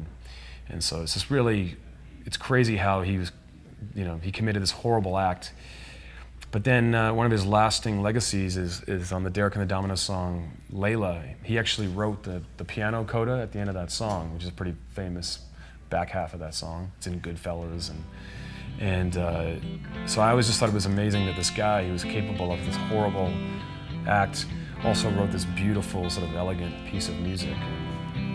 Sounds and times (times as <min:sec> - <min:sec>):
Speech: 0:00.7 - 0:05.6, 0:06.4 - 0:18.1, 0:18.8 - 0:23.4, 0:24.1 - 0:27.8
Acoustic guitar: 0:18.0 - 0:28.3.